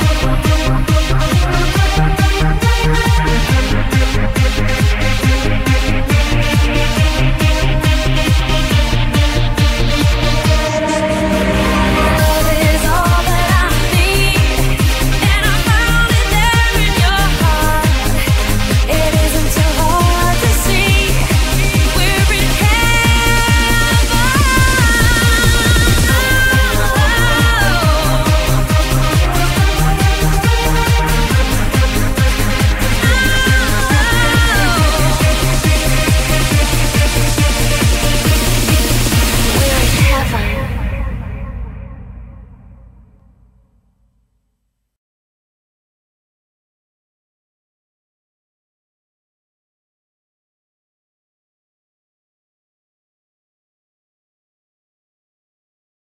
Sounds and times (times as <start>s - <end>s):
Music: 0.0s - 44.8s.